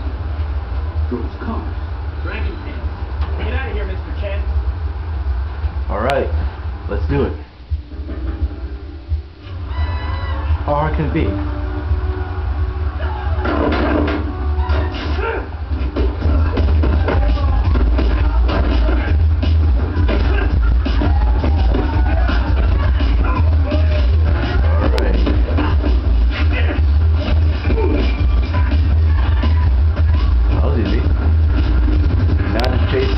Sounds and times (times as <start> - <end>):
Music: 7.1 - 33.1.